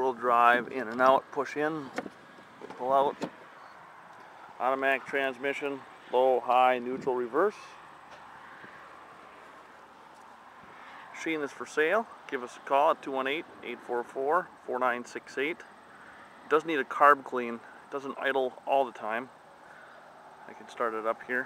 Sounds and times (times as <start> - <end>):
Speech: 0.0 - 1.9, 2.7 - 3.3, 4.6 - 7.8, 11.2 - 15.7, 16.5 - 19.3, 20.5 - 21.4.